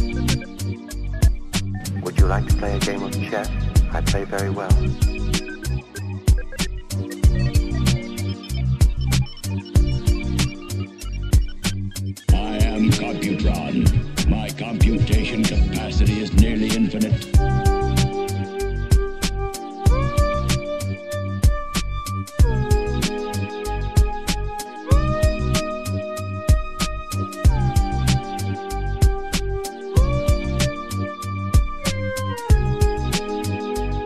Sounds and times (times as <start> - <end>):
Music: 0.0 - 34.0
Speech: 1.8 - 4.9, 12.3 - 17.4.